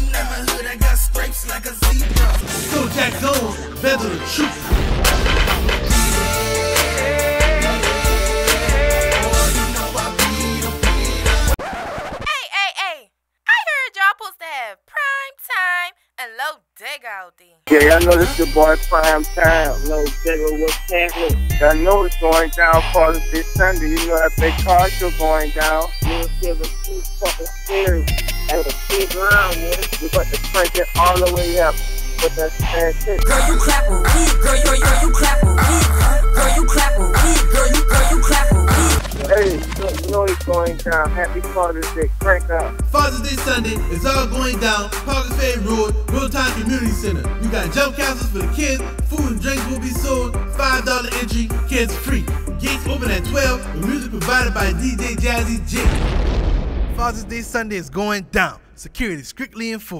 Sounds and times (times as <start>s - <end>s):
Speech: 12.3s - 33.2s, 39.2s - 48.6s, 51.8s - 55.9s, 56.9s - 59.9s.